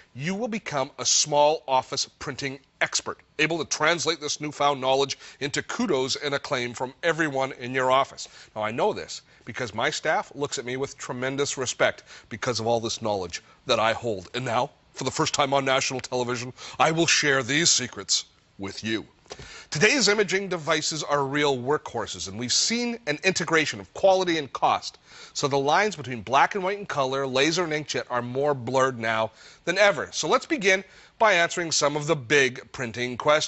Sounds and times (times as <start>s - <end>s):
Speech: 0.2s - 19.1s, 19.7s - 33.4s.